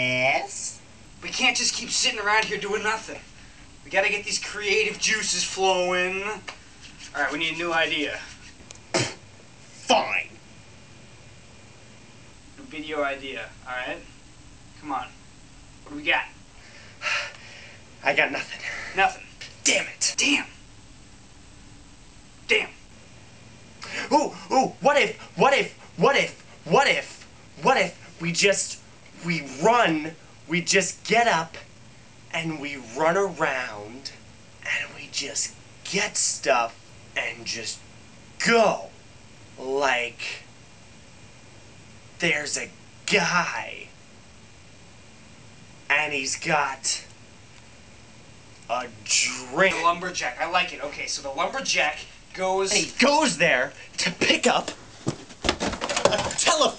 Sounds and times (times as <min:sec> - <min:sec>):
Speech: 0:00.0 - 0:03.3, 0:03.9 - 0:06.5, 0:07.1 - 0:08.4, 0:09.8 - 0:10.4, 0:12.6 - 0:14.1, 0:14.8 - 0:15.2, 0:15.9 - 0:16.4, 0:18.0 - 0:20.6, 0:22.5 - 0:22.8, 0:23.9 - 0:31.7, 0:32.3 - 0:37.8, 0:38.4 - 0:39.0, 0:39.6 - 0:40.5, 0:42.2 - 0:43.9, 0:45.9 - 0:47.1, 0:48.7 - 0:54.8, 0:56.1 - 0:56.7.